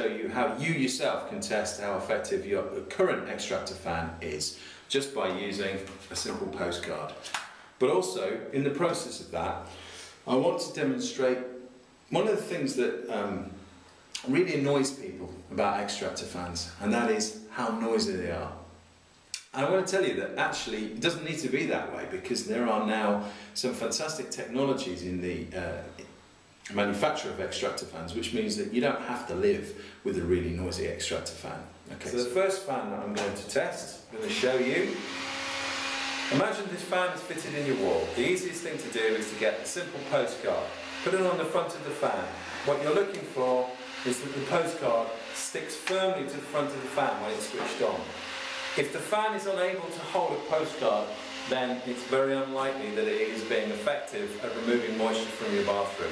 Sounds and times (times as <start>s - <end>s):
Speech: 0.0s - 13.6s, 14.2s - 18.6s, 19.4s - 26.0s, 26.7s - 35.1s, 36.3s - 48.2s, 48.8s - 56.1s
Mechanical fan: 33.2s - 53.8s.